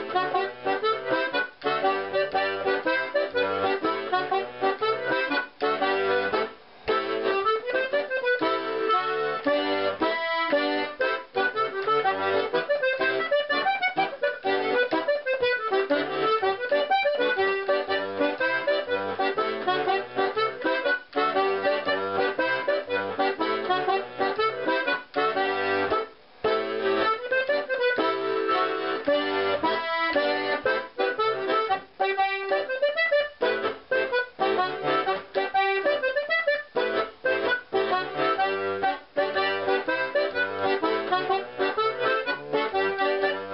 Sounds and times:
Accordion: 0:00.0 - 0:43.5
Folk music: 0:00.0 - 0:43.5.

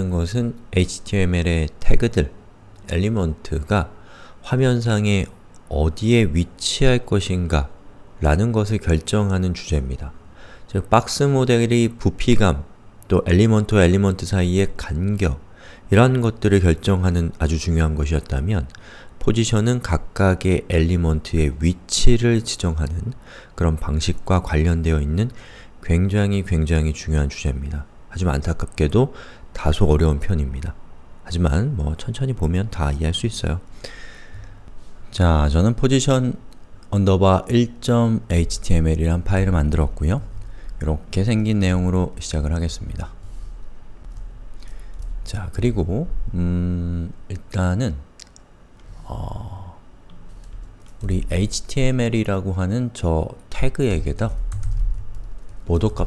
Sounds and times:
Speech: 0:00.0 - 0:33.7, 0:35.1 - 0:43.2, 0:45.2 - 0:48.1, 0:51.0 - 0:54.4, 0:55.7 - 0:56.0.

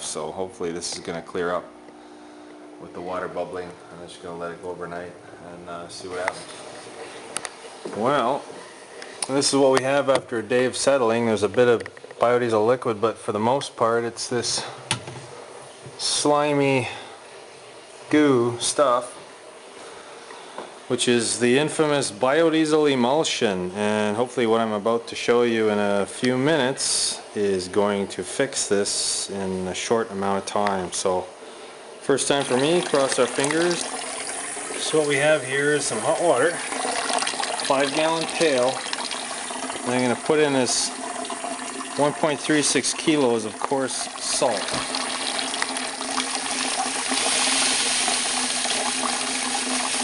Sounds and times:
Water: 0:32.3 - 0:50.0
Water tap, faucet: 0:32.3 - 0:50.0.

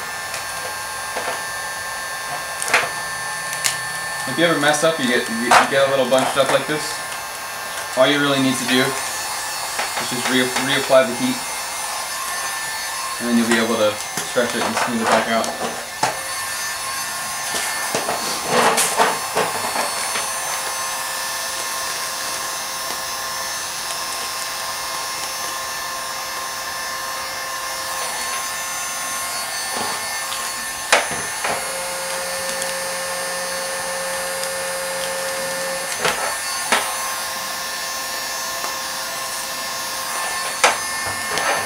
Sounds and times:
Speech: 0:04.3 - 0:07.0, 0:08.0 - 0:09.0, 0:10.0 - 0:11.4, 0:13.2 - 0:15.6.

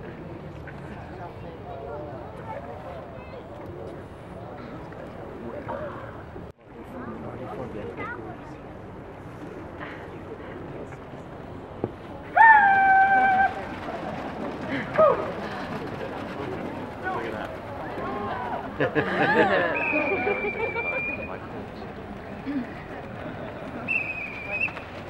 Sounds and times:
Outside, urban or manmade: 0:00.0 - 0:25.1.

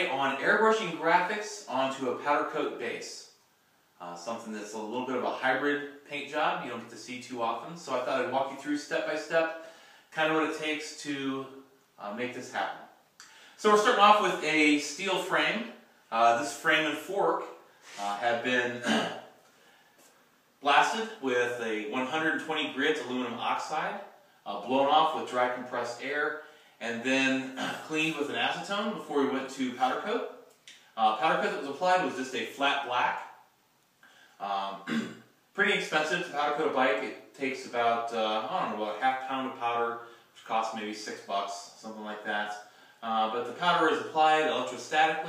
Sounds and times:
Speech: 0:00.0 - 0:03.4, 0:04.0 - 0:13.0, 0:13.6 - 0:19.2, 0:20.6 - 0:30.4, 0:31.0 - 0:33.4, 0:34.4 - 0:45.2.

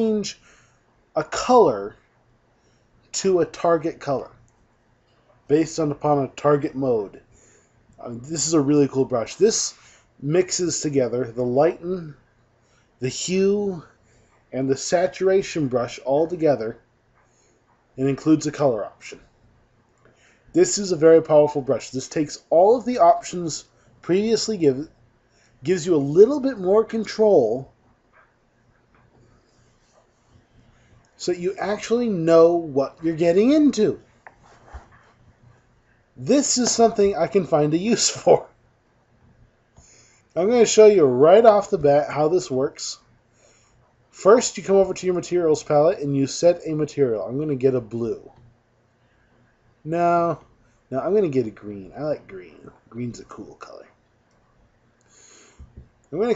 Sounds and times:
Speech: 0:00.0 - 0:00.4, 0:01.2 - 0:02.0, 0:03.1 - 0:04.4, 0:05.5 - 0:07.2, 0:08.0 - 0:12.2, 0:13.0 - 0:13.9, 0:14.5 - 0:16.8, 0:18.0 - 0:19.2, 0:20.6 - 0:24.9, 0:25.6 - 0:27.7, 0:31.2 - 0:34.0, 0:36.2 - 0:38.5, 0:40.4 - 0:43.0, 0:44.2 - 0:48.4, 0:49.8 - 0:54.0, 0:56.1 - 0:56.3.

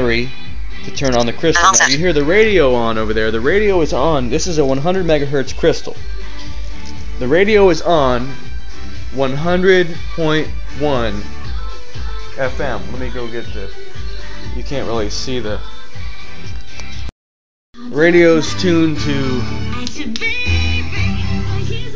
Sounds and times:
Music: 0:00.0 - 0:17.1, 0:17.8 - 0:21.9
Speech: 0:01.0 - 0:05.8.

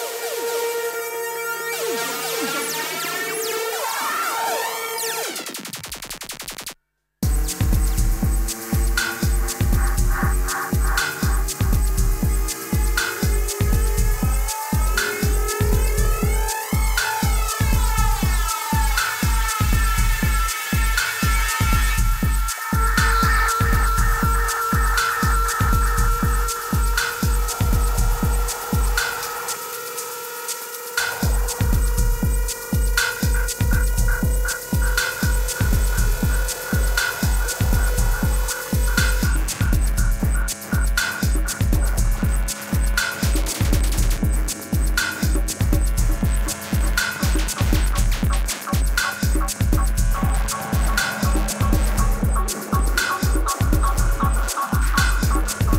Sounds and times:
Music: 0:00.0 - 0:55.7.

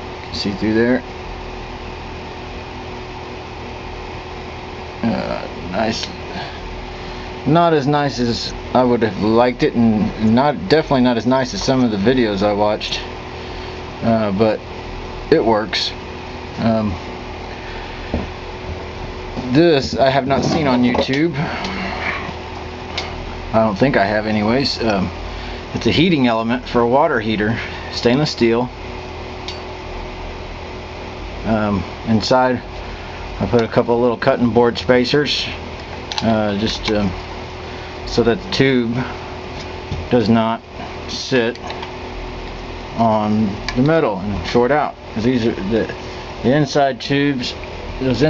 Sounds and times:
Speech: 0:00.3 - 0:01.1, 0:05.0 - 0:06.5, 0:07.4 - 0:13.1, 0:14.0 - 0:14.6, 0:15.3 - 0:16.0, 0:16.6 - 0:17.0, 0:19.4 - 0:21.8, 0:23.5 - 0:28.7, 0:31.4 - 0:32.7, 0:33.4 - 0:35.6, 0:36.2 - 0:37.2, 0:38.0 - 0:39.2, 0:40.1 - 0:41.7, 0:43.0 - 0:48.2.

